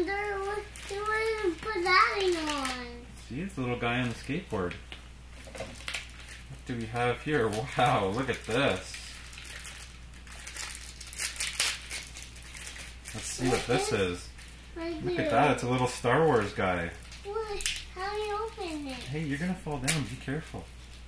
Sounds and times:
Inside, small room: 0:00.0 - 0:21.0.

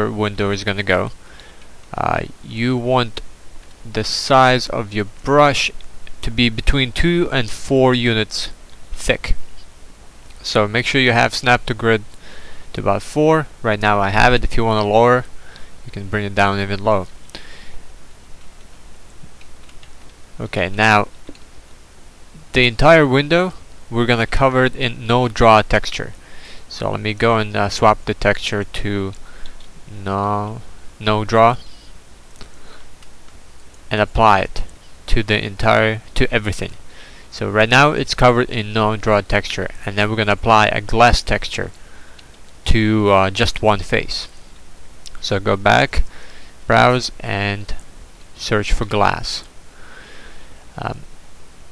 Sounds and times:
Speech: 0:00.0 - 0:01.2, 0:01.9 - 0:03.2, 0:03.9 - 0:09.4, 0:10.4 - 0:12.1, 0:12.8 - 0:15.3, 0:15.9 - 0:17.1, 0:20.4 - 0:21.1, 0:22.5 - 0:29.2, 0:29.9 - 0:31.6, 0:33.9 - 0:41.8, 0:42.7 - 0:44.3, 0:45.1 - 0:46.1, 0:46.7 - 0:47.8, 0:48.4 - 0:49.5, 0:50.8 - 0:51.1.

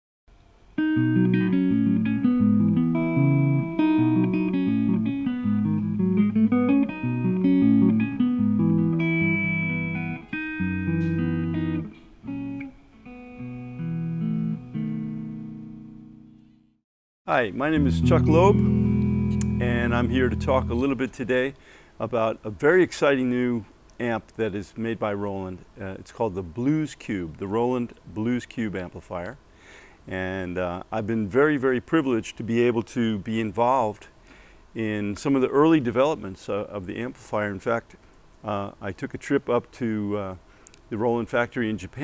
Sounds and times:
Electric guitar: 0:00.8 - 0:16.7, 0:17.8 - 0:21.1.

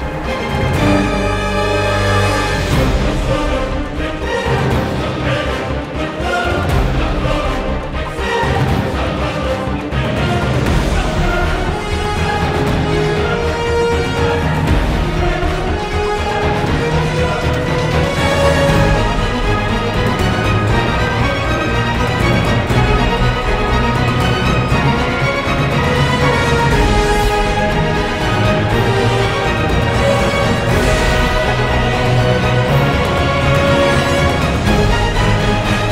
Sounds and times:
Music: 0:00.0 - 0:35.9.

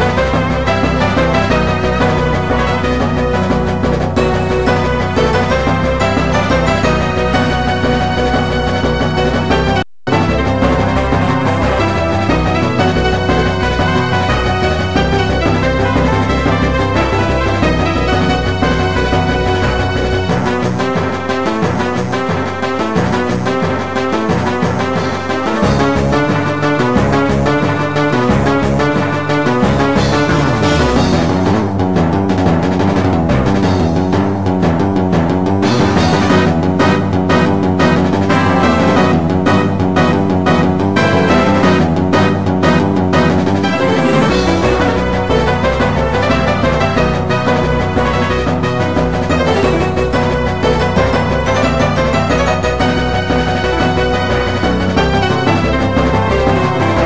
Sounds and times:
Exciting music: 0:00.0 - 0:57.0
Soundtrack music: 0:00.0 - 0:57.0.

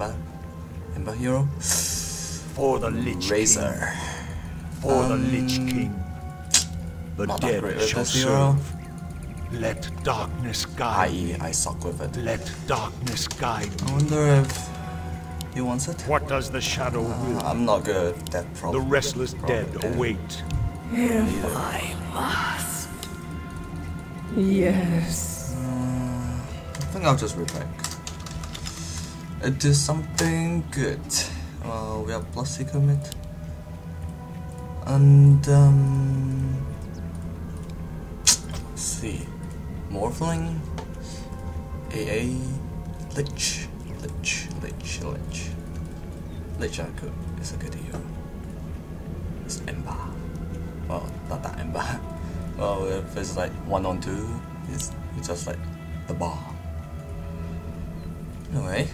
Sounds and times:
Speech: 0:02.6 - 0:04.0, 0:04.8 - 0:06.0, 0:07.2 - 0:08.7, 0:09.5 - 0:14.7, 0:15.6 - 0:22.5, 0:24.4 - 0:26.0, 0:31.7 - 0:33.1.

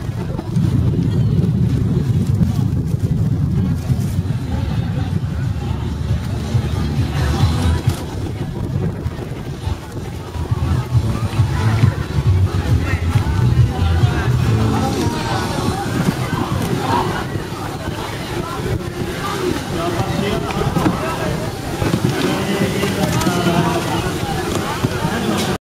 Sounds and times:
Speech: 0:00.0 - 0:25.6.

